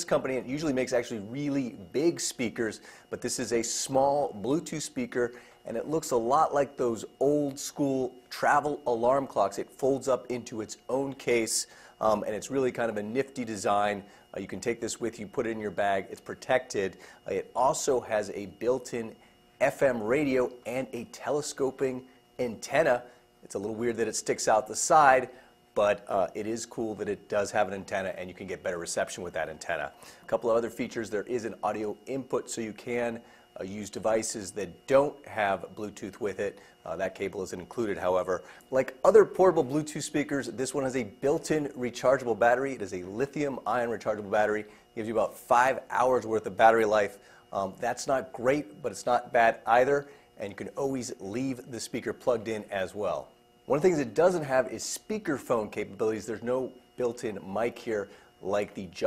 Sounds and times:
Speech: 0.0s - 59.0s.

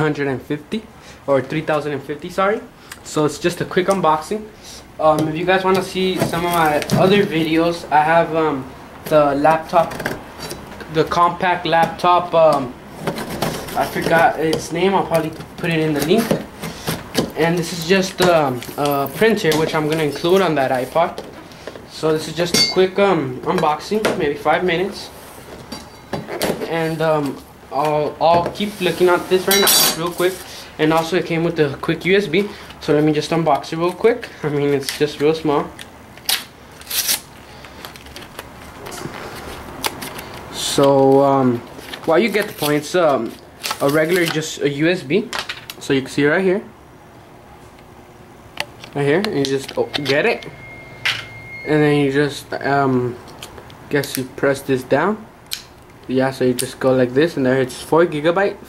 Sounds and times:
Speech: 0.0s - 10.0s, 10.9s - 12.8s, 13.8s - 16.4s, 17.4s - 21.2s, 21.9s - 25.2s, 26.6s - 35.8s, 40.6s - 46.8s, 48.9s - 50.5s, 51.7s - 53.2s, 53.9s - 55.3s, 56.1s - 58.6s.

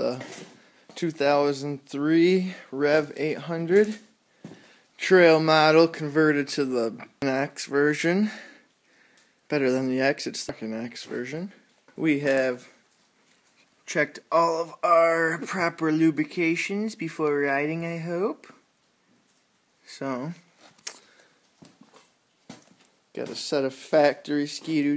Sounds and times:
Speech: 0.0s - 0.4s, 1.0s - 4.1s, 5.0s - 8.5s, 9.5s - 12.8s, 13.9s - 18.6s, 19.8s - 20.5s, 23.1s - 24.9s.

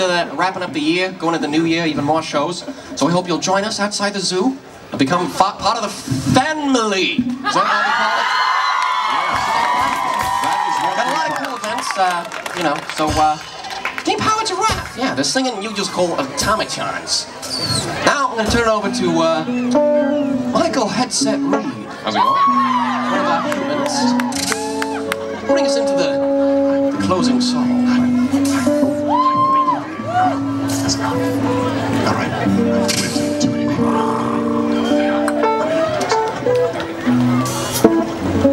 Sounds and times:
Music: 18.1s - 38.5s.

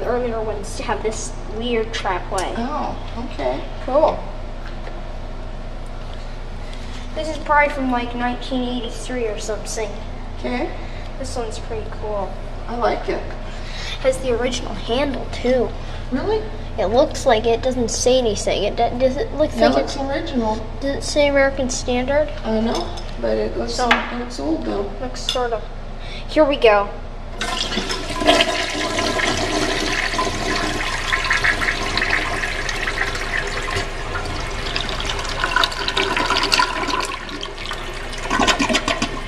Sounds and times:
Speech: 0.0s - 4.3s, 7.2s - 13.4s, 14.0s - 25.7s, 26.3s - 27.0s
Toilet flush: 27.4s - 39.2s.

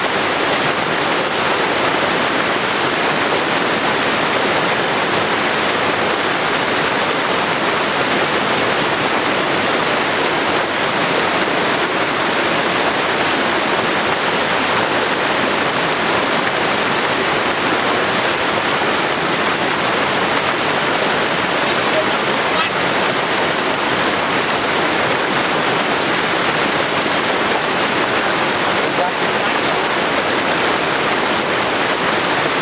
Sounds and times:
Waterfall: 0.0s - 32.6s
Speech: 21.6s - 22.9s, 28.8s - 29.9s.

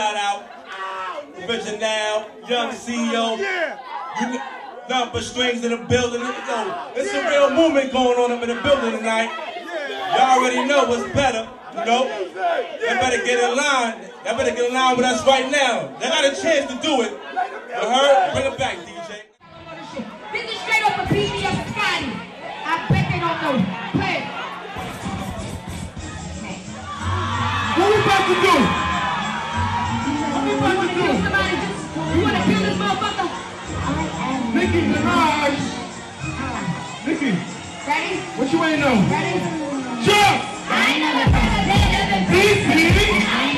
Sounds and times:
Crowd: 0.0s - 43.5s.

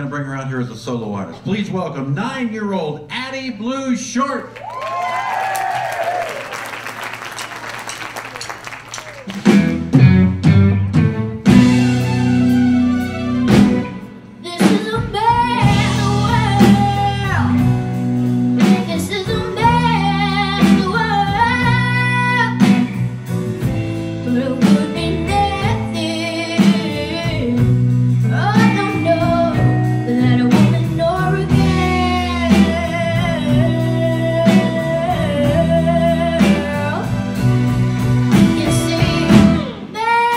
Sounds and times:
Music: 8.4s - 40.3s
Child singing: 14.4s - 17.6s, 18.6s - 22.9s, 24.3s - 27.7s, 28.3s - 37.1s, 38.5s - 40.3s.

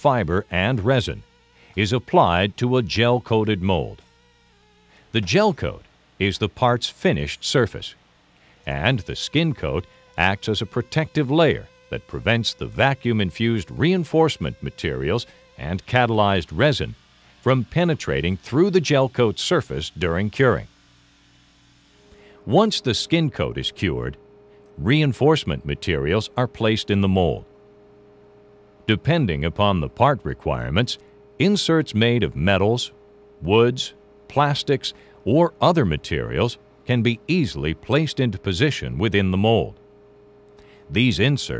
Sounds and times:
Speech: 0.0s - 4.0s, 5.1s - 8.0s, 8.6s - 20.7s, 22.4s - 24.2s, 24.8s - 27.5s, 28.9s - 39.8s, 40.9s - 41.5s.

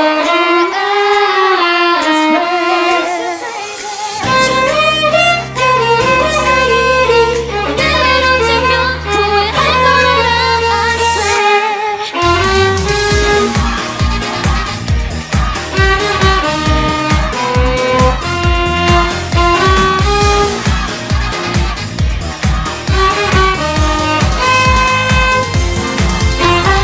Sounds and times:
Violin, fiddle: 0.0s - 21.8s, 22.6s - 26.8s.

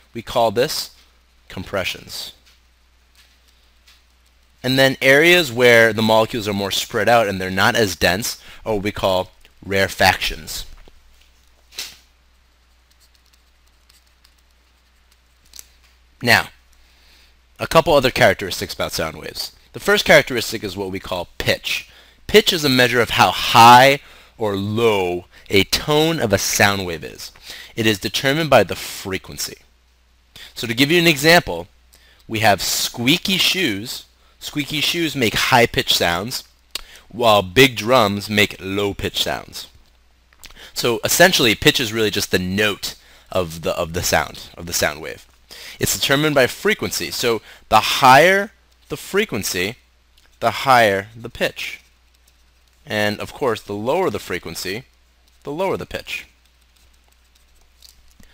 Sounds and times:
Speech: 0.1s - 2.4s, 4.6s - 10.8s, 16.2s - 16.6s, 17.6s - 29.7s, 30.5s - 31.7s, 32.3s - 36.5s, 37.1s - 39.8s, 40.8s - 49.8s, 50.4s - 51.8s, 52.9s - 56.3s.

